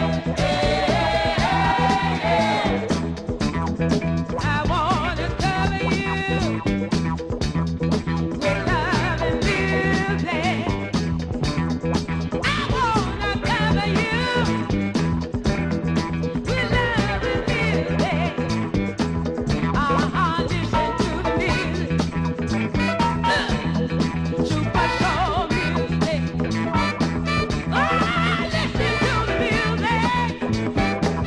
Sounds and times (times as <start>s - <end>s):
Soul music: 0.0s - 31.2s.